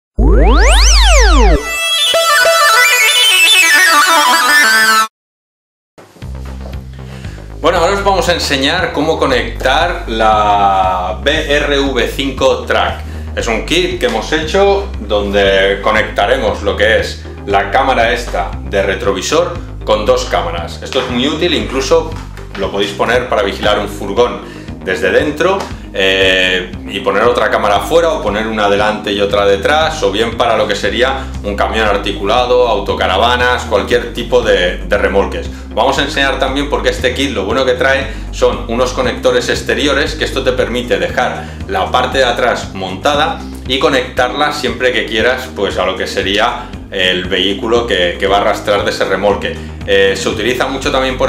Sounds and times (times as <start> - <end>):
Music: 0.2 - 5.2, 6.0 - 51.2
Speech: 7.6 - 51.2.